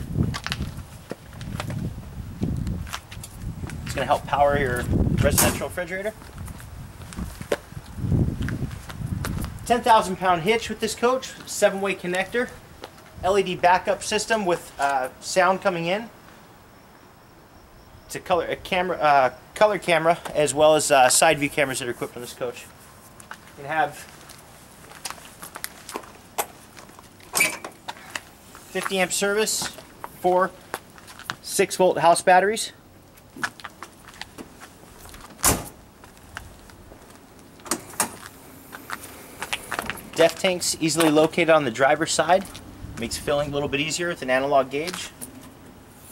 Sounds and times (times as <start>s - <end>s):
Door: 35.4s - 35.8s.